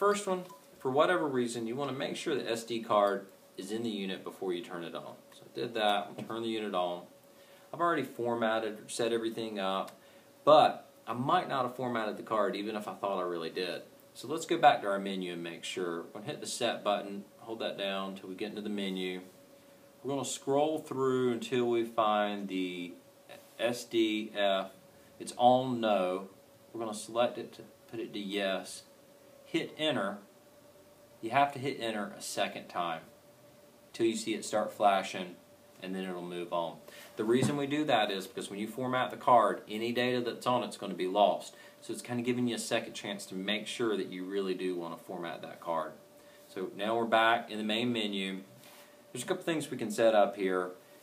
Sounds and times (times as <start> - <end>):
Speech: 0.0 - 7.1, 7.7 - 19.3, 20.0 - 28.9, 29.5 - 30.3, 31.2 - 33.1, 33.9 - 48.5, 49.1 - 50.8.